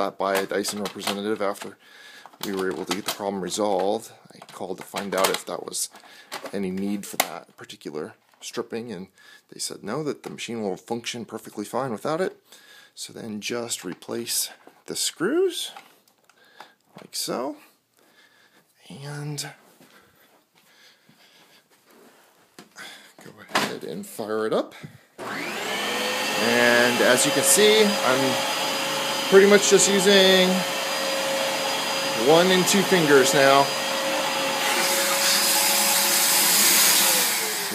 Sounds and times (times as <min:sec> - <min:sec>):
Vacuum cleaner: 0:25.2 - 0:37.7.